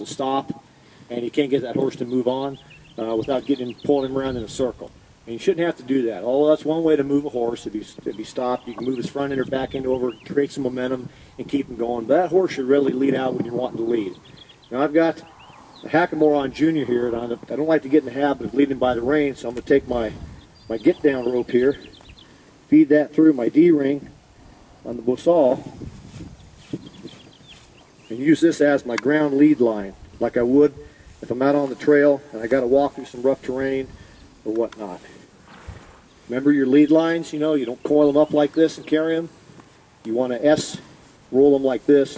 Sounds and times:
Speech: 0.0s - 21.9s, 22.7s - 24.1s, 24.8s - 25.7s, 28.1s - 35.2s, 36.3s - 39.3s, 40.0s - 42.1s.

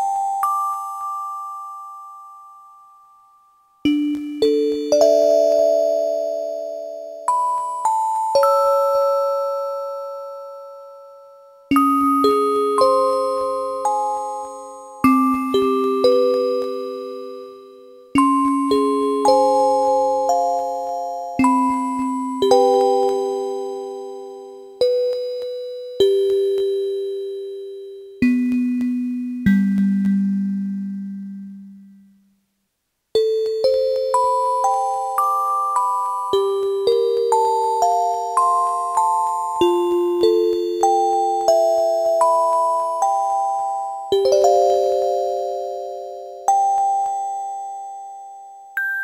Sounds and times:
Music: 0.0s - 49.0s.

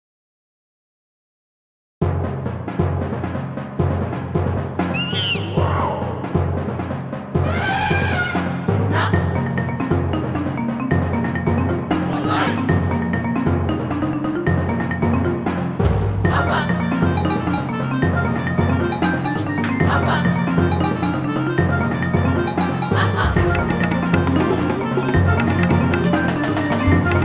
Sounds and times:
Soundtrack music: 2.7s - 27.2s.

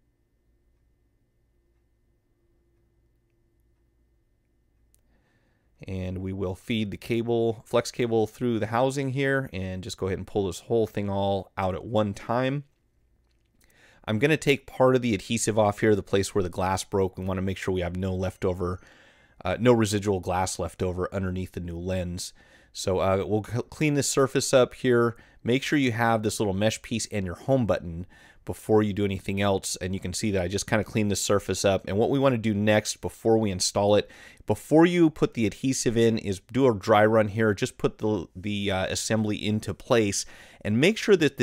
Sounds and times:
Speech: 5.8s - 12.7s, 14.0s - 18.8s, 19.4s - 41.4s.

